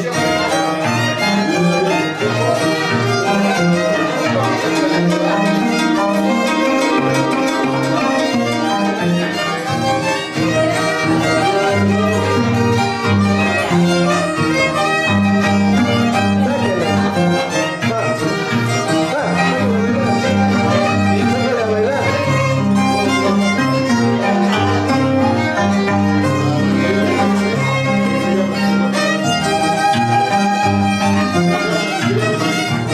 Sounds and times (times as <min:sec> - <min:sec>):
Speech: 0:00.0 - 0:14.3, 0:15.7 - 0:25.6, 0:26.2 - 0:32.9
Violin, fiddle: 0:00.0 - 0:32.9.